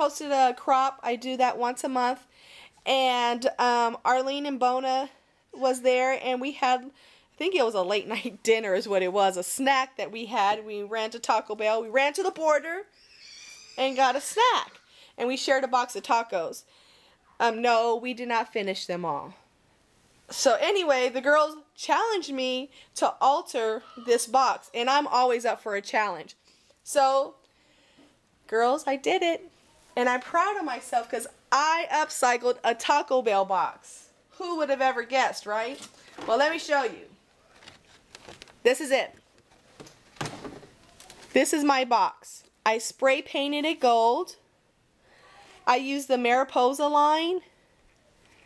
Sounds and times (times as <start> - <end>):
Speech: 0.0 - 2.3, 2.9 - 12.9, 13.8 - 16.6, 17.4 - 19.4, 20.3 - 27.4, 28.5 - 37.2, 41.4 - 44.4, 45.3 - 47.4.